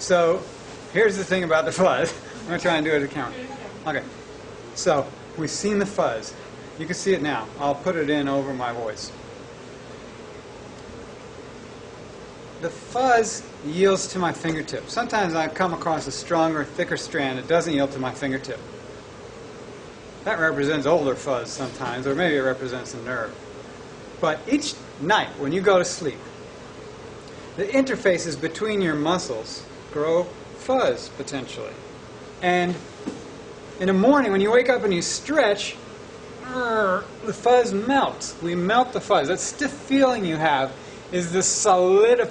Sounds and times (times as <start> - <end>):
Male speech, man speaking: 0.0 - 4.1, 4.8 - 9.2, 12.6 - 18.7, 20.2 - 23.4, 24.2 - 26.2, 27.6 - 31.8, 32.4 - 32.8, 33.8 - 35.8, 36.6 - 42.3
Narration, monologue: 0.0 - 42.3.